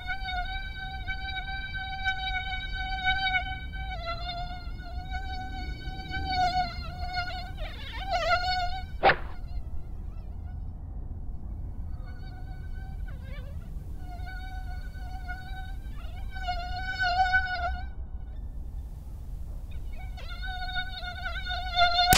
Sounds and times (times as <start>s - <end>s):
Mosquito: 0.0s - 10.6s, 11.9s - 19.1s, 19.7s - 22.1s
Fly, housefly: 0.0s - 10.7s, 11.9s - 22.1s.